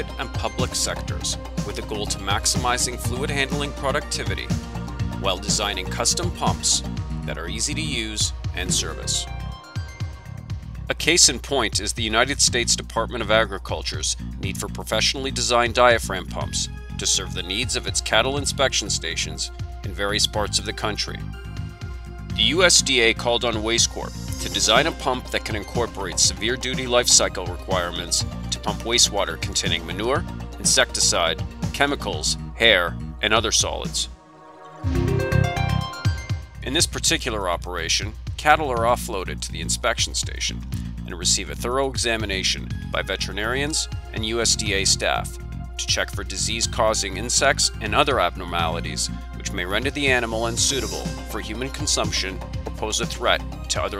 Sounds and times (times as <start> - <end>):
Speech: 0.0 - 4.6, 5.2 - 9.3, 10.9 - 21.2, 22.4 - 34.1, 36.6 - 53.9
Music: 0.0 - 53.9.